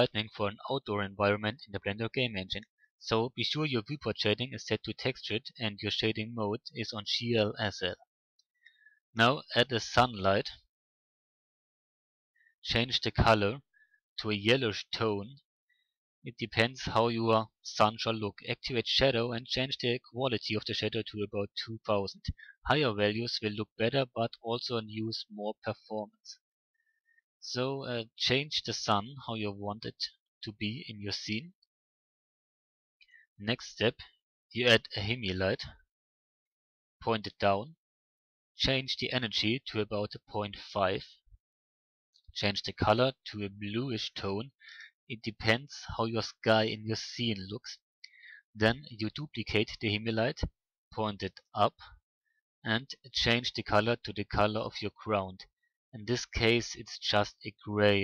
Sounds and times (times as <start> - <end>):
Speech: 0.0 - 8.1, 9.2 - 10.7, 12.6 - 15.4, 16.3 - 26.4, 27.4 - 31.6, 33.4 - 35.8, 37.0 - 37.8, 38.6 - 41.2, 42.3 - 52.0, 52.6 - 58.0.